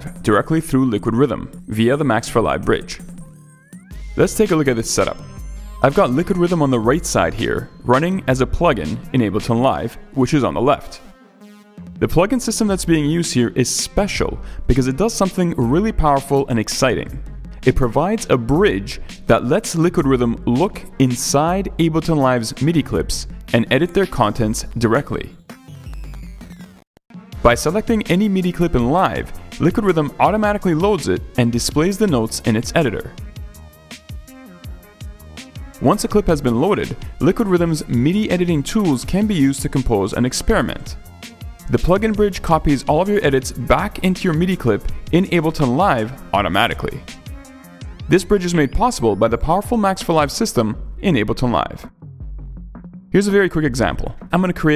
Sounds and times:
Speech: 0.0 - 3.0, 4.2 - 5.2, 5.8 - 11.0, 12.0 - 25.4, 27.4 - 33.2, 35.8 - 41.0, 41.7 - 47.0, 48.1 - 51.9, 53.2 - 54.7
Music: 0.0 - 54.7.

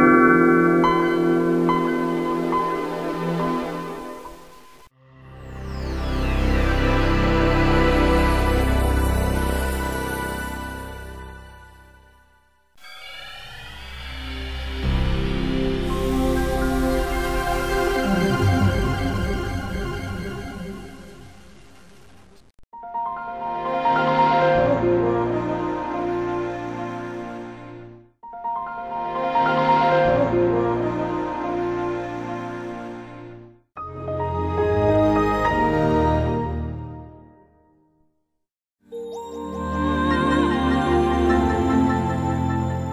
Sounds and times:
Music: 0.0 - 42.9.

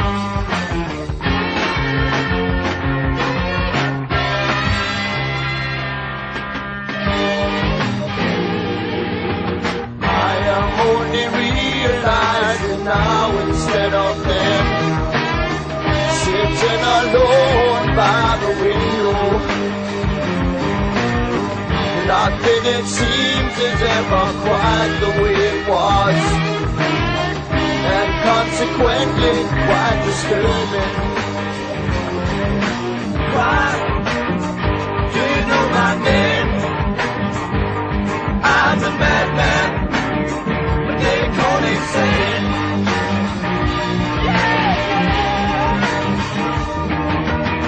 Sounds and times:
Music: 0.0 - 47.6.

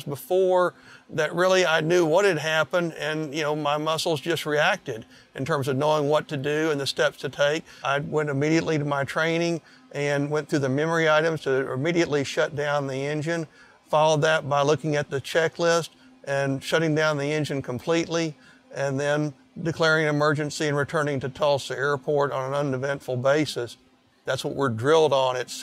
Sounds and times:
Speech: 0.0 - 25.6.

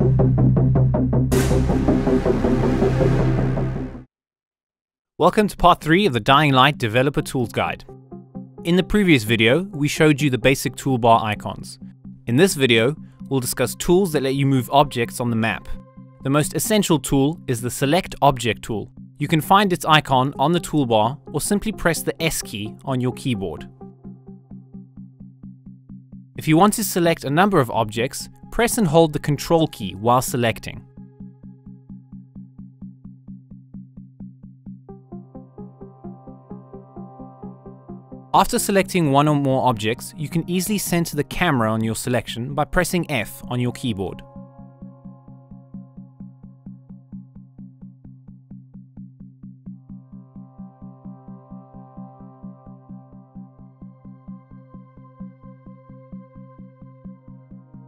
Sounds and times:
Speech: 5.2 - 7.9, 8.7 - 23.7, 26.4 - 30.8, 38.4 - 44.3.

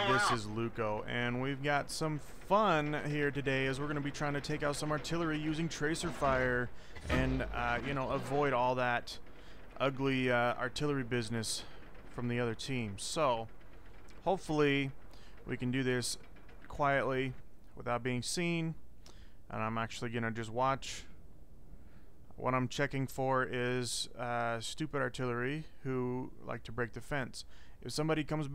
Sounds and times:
Speech: 0.0 - 9.2, 9.8 - 13.5, 14.2 - 18.8, 19.5 - 21.2, 22.4 - 28.5.

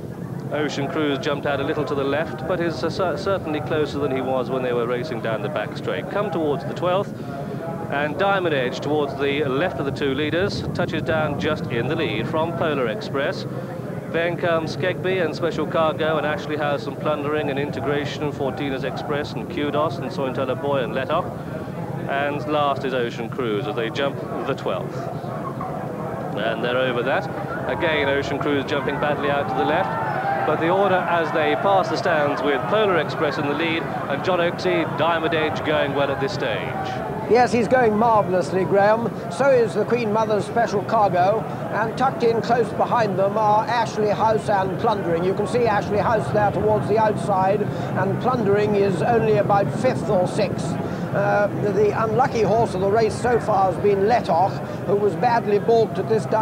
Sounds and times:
Speech: 0.5 - 13.5, 14.1 - 21.3, 22.0 - 25.1, 26.4 - 56.4.

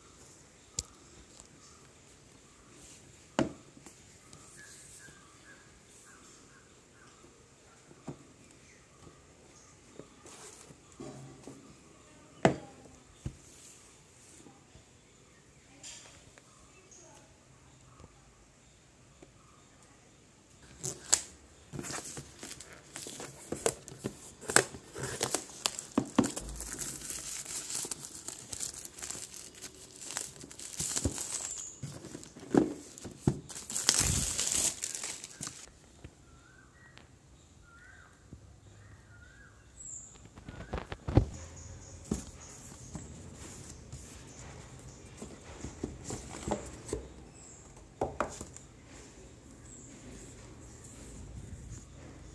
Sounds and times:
Crumpling, crinkling: 20.7 - 35.7.

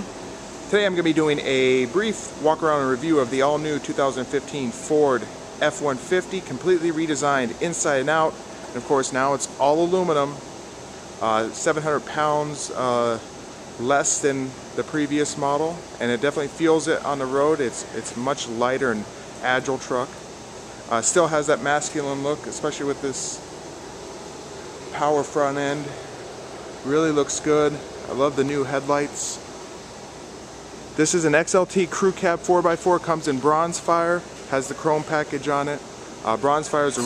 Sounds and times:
Speech: 0.7 - 10.4, 11.2 - 20.2, 20.9 - 23.4, 25.0 - 26.0, 26.8 - 29.5, 31.0 - 37.0.

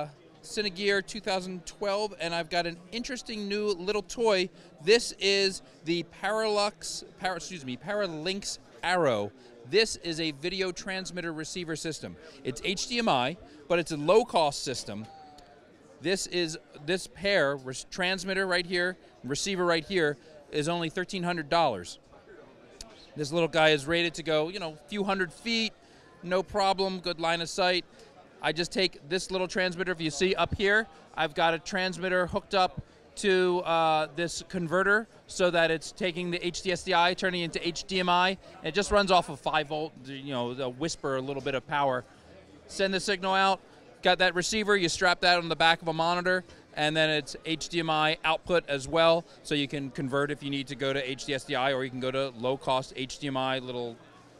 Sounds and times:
Speech: 0.0 - 54.3.

